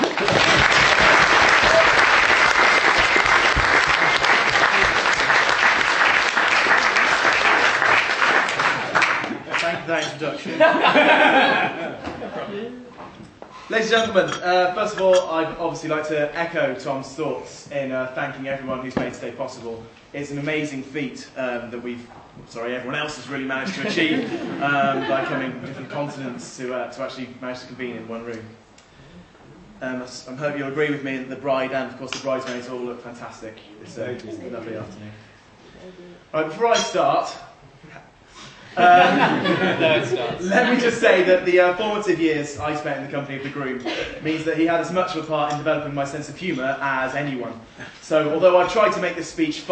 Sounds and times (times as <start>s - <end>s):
Male speech, man speaking: 9.5s - 10.8s, 13.7s - 28.6s, 29.8s - 35.2s, 36.3s - 38.1s, 38.8s - 49.7s
Narration, monologue: 13.0s - 49.7s.